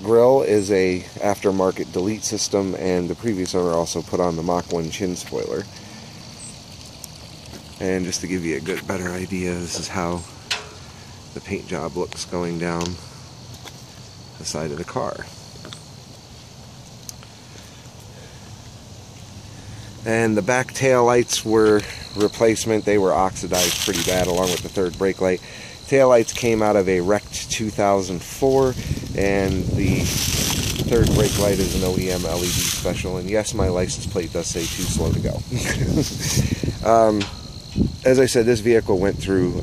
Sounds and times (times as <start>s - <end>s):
Speech: 0.0s - 5.7s, 7.8s - 10.3s, 11.4s - 13.0s, 14.4s - 15.4s, 20.0s - 35.7s, 36.8s - 37.4s, 38.0s - 39.6s
Outside, rural or natural: 0.0s - 39.6s.